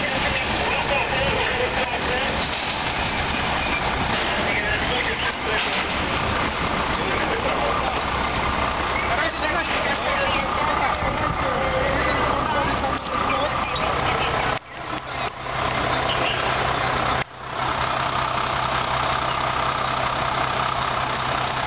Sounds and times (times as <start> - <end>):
Speech: 0.0 - 2.5, 4.2 - 6.1, 6.8 - 8.2, 9.0 - 15.4
Fire: 0.0 - 21.6
Truck: 0.0 - 21.6.